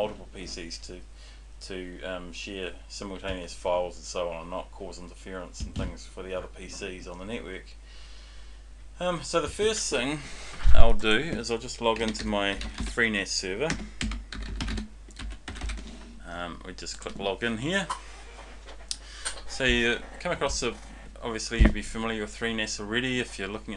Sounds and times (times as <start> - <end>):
Speech: 0.0 - 7.8, 9.0 - 13.8, 16.2 - 18.0, 19.5 - 23.7
Computer keyboard: 12.0 - 13.0, 13.7 - 15.9.